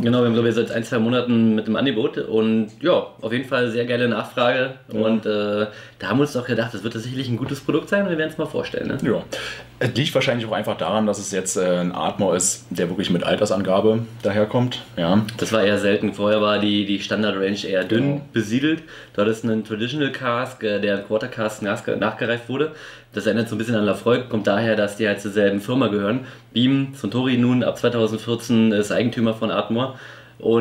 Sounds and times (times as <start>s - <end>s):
Speech: 0.0s - 30.6s.